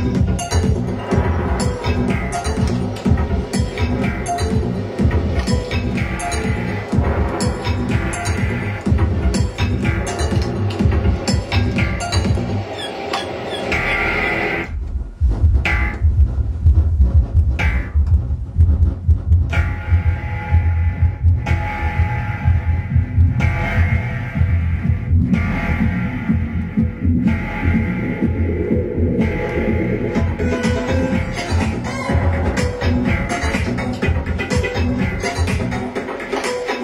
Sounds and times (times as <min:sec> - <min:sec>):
House music: 0:00.0 - 0:36.8
Techno: 0:00.0 - 0:36.8.